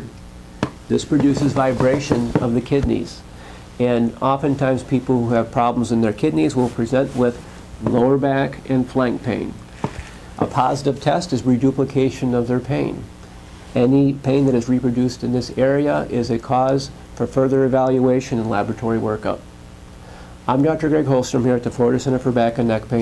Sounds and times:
Speech: 0:00.9 - 0:09.6, 0:10.4 - 0:13.1, 0:13.8 - 0:19.5, 0:20.5 - 0:23.0.

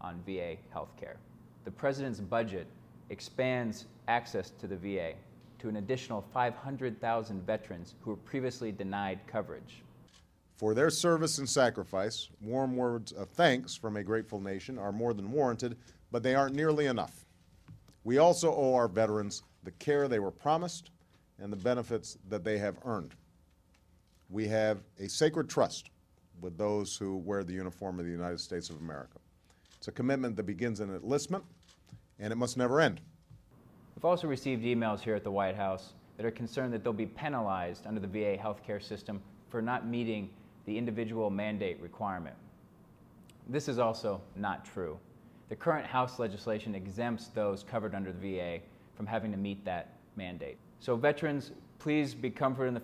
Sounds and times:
Speech: 0:00.0 - 0:09.9, 0:10.6 - 0:17.2, 0:18.1 - 0:23.2, 0:24.3 - 0:29.2, 0:29.8 - 0:31.5, 0:32.2 - 0:33.0, 0:34.0 - 0:42.4, 0:43.5 - 0:52.8.

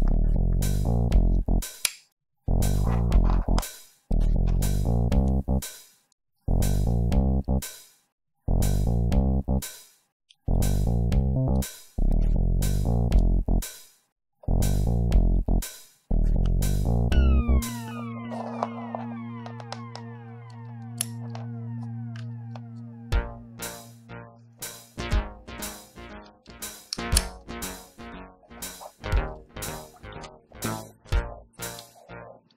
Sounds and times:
Sound effect: 0:02.5 - 0:04.9, 0:16.2 - 0:32.5.

